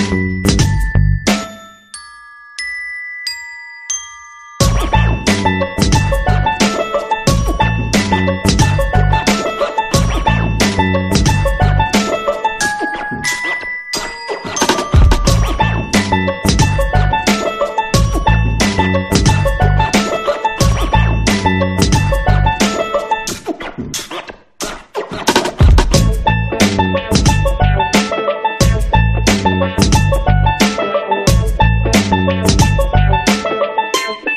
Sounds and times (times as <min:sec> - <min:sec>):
Glockenspiel: 0:00.0 - 0:23.3, 0:26.2 - 0:34.3
Marimba, xylophone: 0:00.0 - 0:23.3, 0:26.0 - 0:34.3.